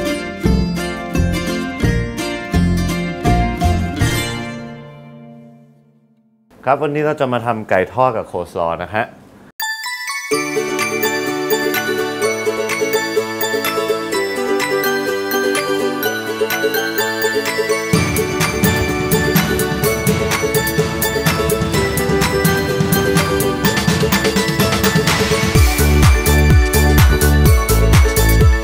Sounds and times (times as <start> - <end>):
Music: 0.0 - 6.4, 9.6 - 28.6
Speech: 6.6 - 9.2.